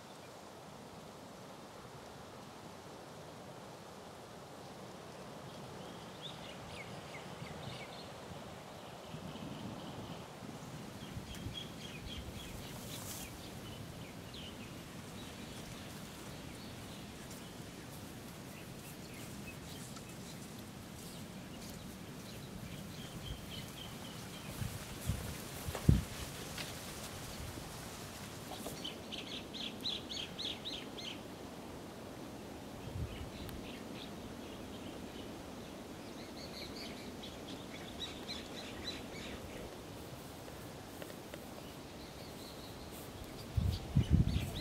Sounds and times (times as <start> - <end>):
Outside, rural or natural: 0.0 - 44.6.